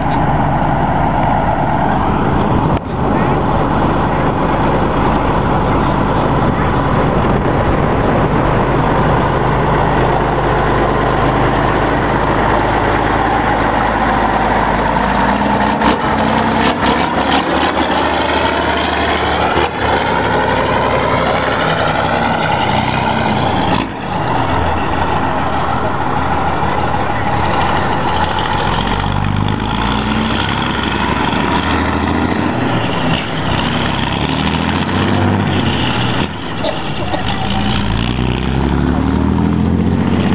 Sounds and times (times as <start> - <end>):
Truck: 0.0 - 40.3.